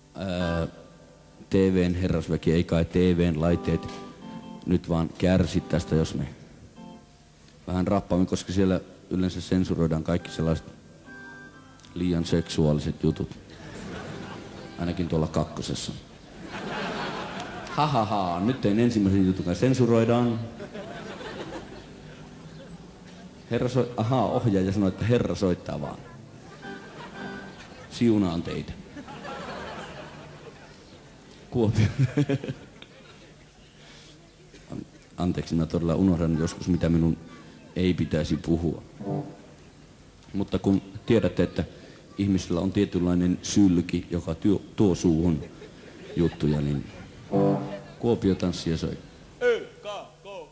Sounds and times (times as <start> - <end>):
Music: 0.0 - 15.9, 18.2 - 32.0, 38.9 - 39.9, 47.3 - 48.2.